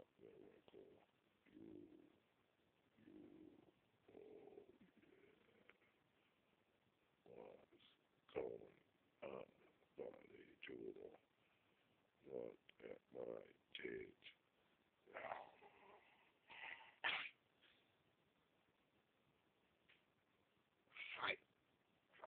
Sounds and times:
Speech: 0.0 - 2.0, 7.2 - 11.2, 12.2 - 14.4, 15.1 - 16.1, 21.0 - 21.4.

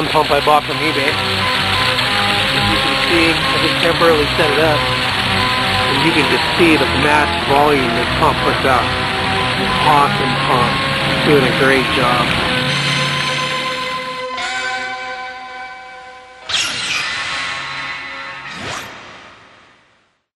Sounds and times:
Water: 0.0 - 14.1.

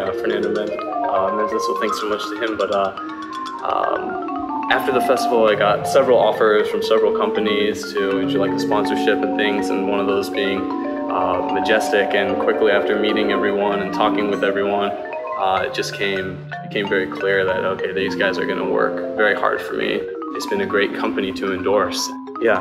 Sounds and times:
Speech: 0.0 - 3.0, 3.6 - 4.1, 4.7 - 22.6
Percussion: 0.0 - 22.6.

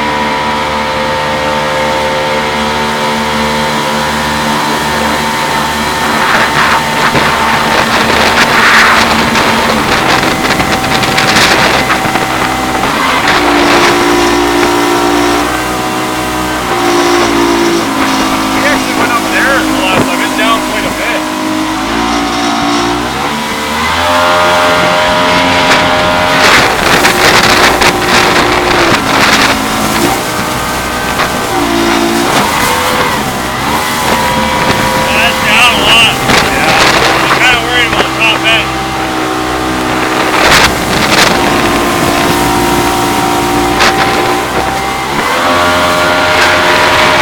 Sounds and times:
Gurgling: 4.6 - 47.2
Speech: 18.6 - 21.3, 35.1 - 38.7.

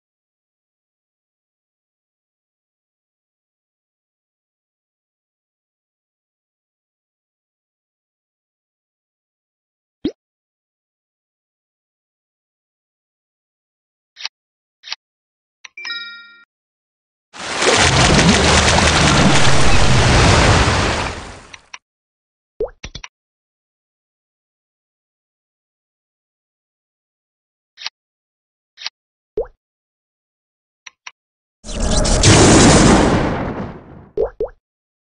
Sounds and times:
Thunder: 17.7 - 21.4, 31.8 - 34.1.

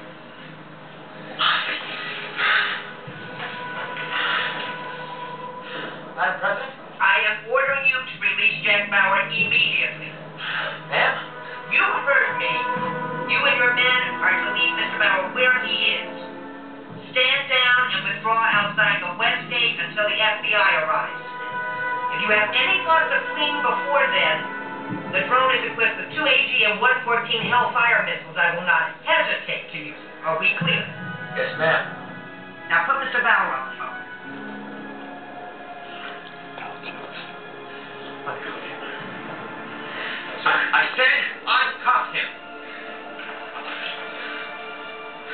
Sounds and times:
Music: 0.0 - 45.3
Speech: 17.2 - 21.1, 25.1 - 31.9.

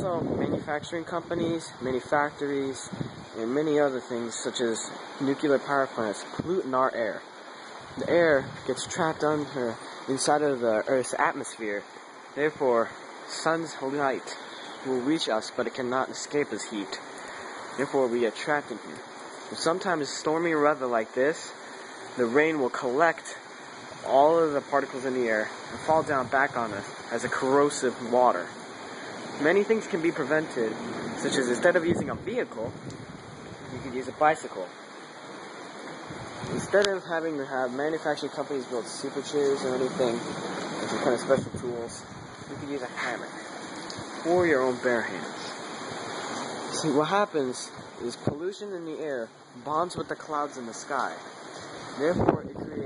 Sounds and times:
Rain: 0.0 - 52.8.

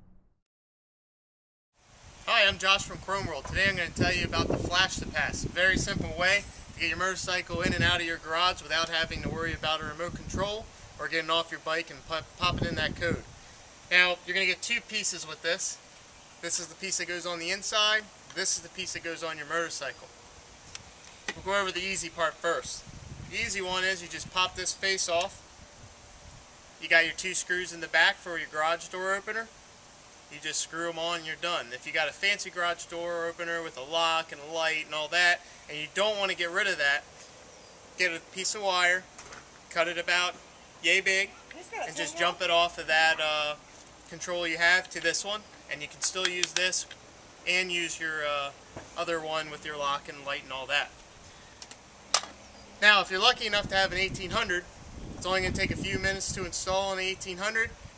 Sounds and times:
Speech: 2.3 - 13.2, 13.9 - 15.8, 16.4 - 20.1, 21.4 - 22.8, 23.4 - 25.4, 26.8 - 29.5, 30.4 - 37.1, 38.0 - 39.1, 39.7 - 46.9, 47.5 - 51.0, 52.8 - 57.8.

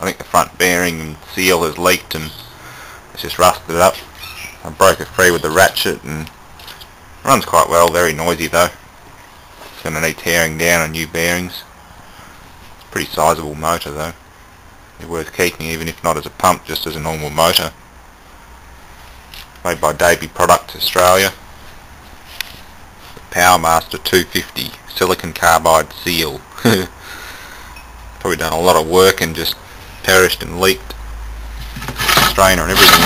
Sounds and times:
Speech: 0.0 - 2.5, 3.2 - 4.0, 4.6 - 6.3, 7.2 - 8.8, 9.8 - 11.7, 12.9 - 14.2, 15.0 - 17.8, 19.6 - 21.4, 23.3 - 26.9, 28.2 - 31.0, 32.0 - 33.0.

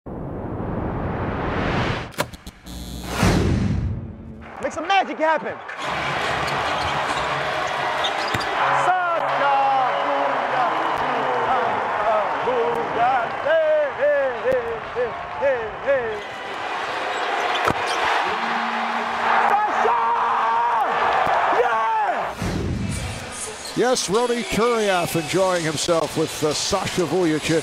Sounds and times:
Speech: 4.6 - 5.6, 23.8 - 27.6
Basketball bounce: 8.2 - 8.5.

